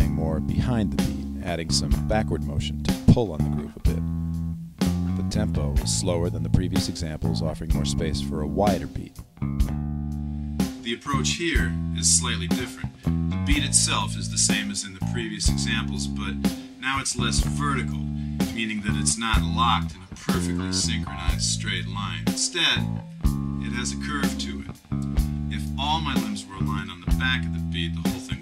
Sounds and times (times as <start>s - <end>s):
Speech: 0.0s - 4.0s, 5.2s - 9.2s, 10.8s - 22.9s, 23.6s - 24.8s, 25.5s - 28.4s
Drum kit: 0.0s - 4.1s, 4.8s - 9.8s, 13.5s - 19.6s.